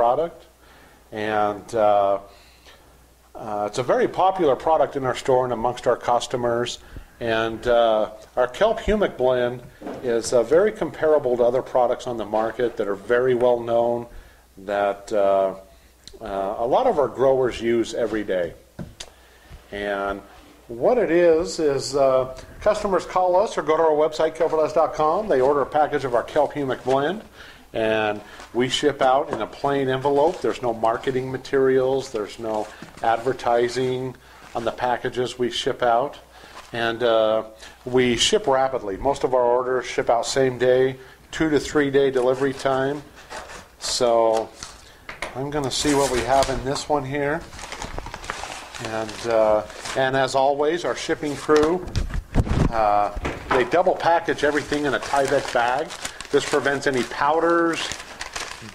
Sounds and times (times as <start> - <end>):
Speech: 0.0 - 0.5, 1.1 - 2.3, 3.4 - 18.6, 19.7 - 43.1, 43.8 - 44.6, 45.2 - 47.5, 48.8 - 51.9, 52.7 - 58.0.